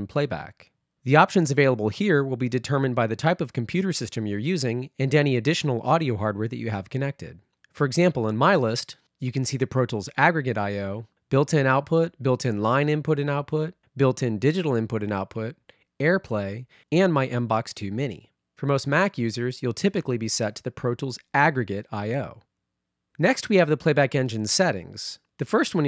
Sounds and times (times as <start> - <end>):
Speech: 0.0 - 22.4, 23.2 - 25.8.